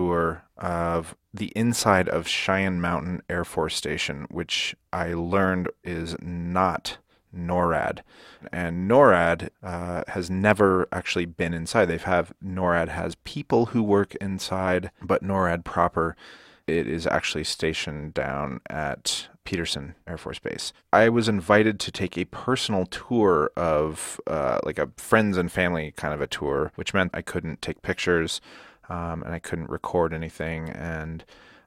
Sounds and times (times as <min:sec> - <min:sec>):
Speech: 0:00.0 - 0:31.3.